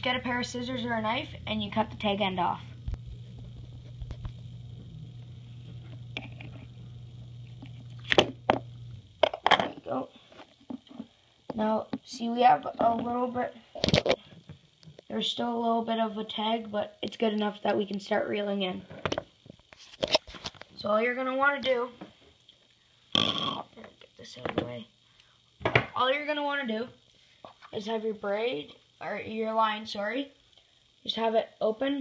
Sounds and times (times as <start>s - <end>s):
Speech: 0.0s - 2.8s, 9.6s - 10.2s, 11.5s - 13.6s, 15.1s - 18.9s, 20.8s - 22.0s, 23.4s - 24.9s, 25.9s - 27.0s, 27.7s - 30.4s, 31.0s - 32.0s.